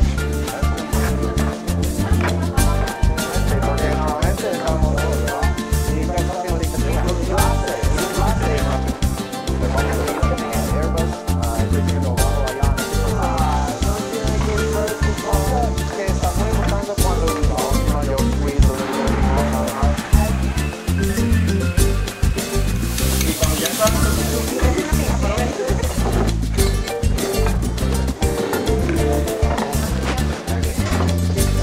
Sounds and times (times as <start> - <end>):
Sizzle: 12.2 - 17.9, 18.8 - 28.7.